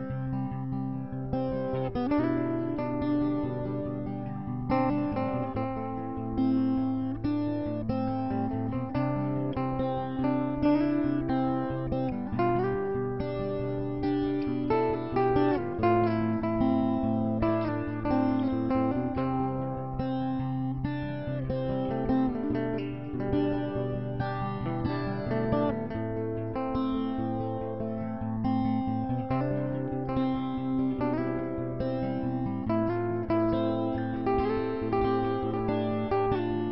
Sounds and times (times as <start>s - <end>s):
Music: 0.0s - 36.7s.